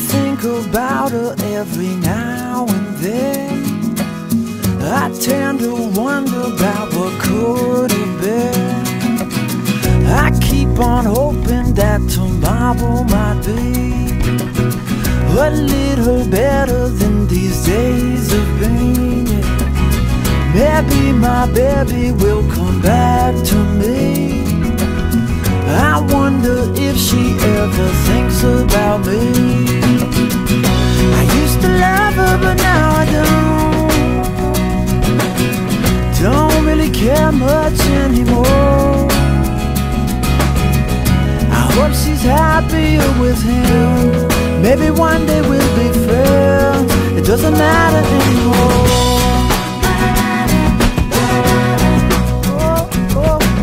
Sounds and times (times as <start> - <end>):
Music: 0.0 - 53.6.